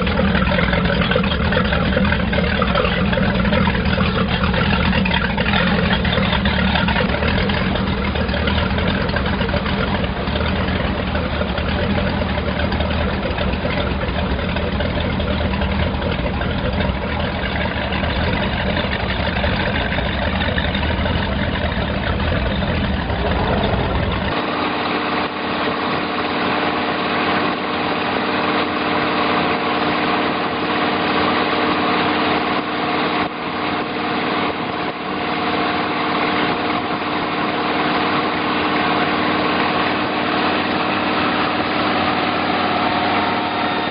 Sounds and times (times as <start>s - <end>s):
Motorboat, speedboat: 0.0s - 43.9s.